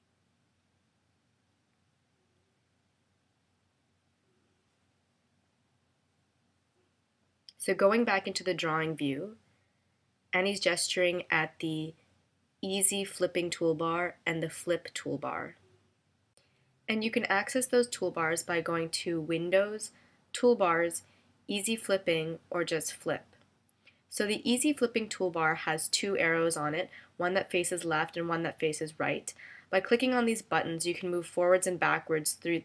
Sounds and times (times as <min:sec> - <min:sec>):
Speech: 0:07.5 - 0:09.4, 0:10.4 - 0:12.0, 0:12.6 - 0:15.6, 0:16.9 - 0:23.3, 0:24.1 - 0:32.6.